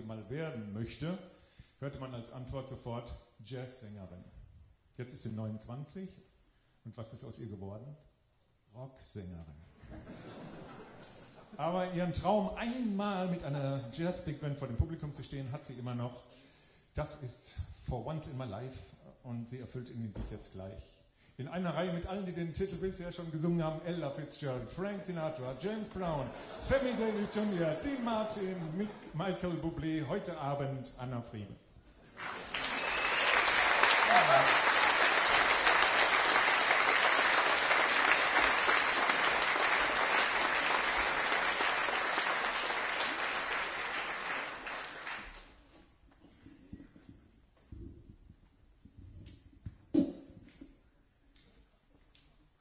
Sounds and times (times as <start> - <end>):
Speech: 0.0 - 4.4, 5.0 - 8.1, 8.7 - 9.7, 11.6 - 16.3, 17.0 - 31.6.